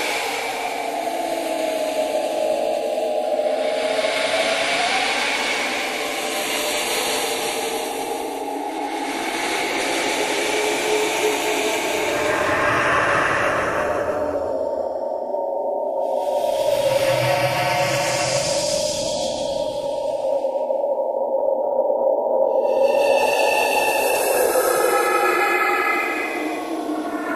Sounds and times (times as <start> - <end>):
Music: 0.0 - 27.3.